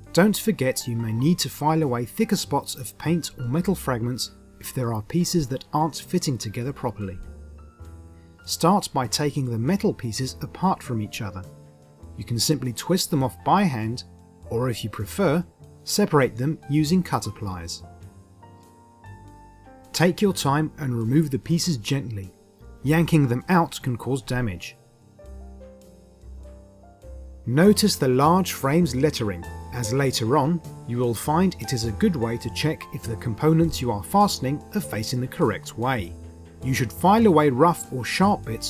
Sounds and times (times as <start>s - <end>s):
Music: 0.0s - 38.7s
Speech: 0.2s - 7.2s, 8.5s - 11.5s, 12.2s - 17.9s, 20.0s - 24.8s, 27.5s - 38.7s.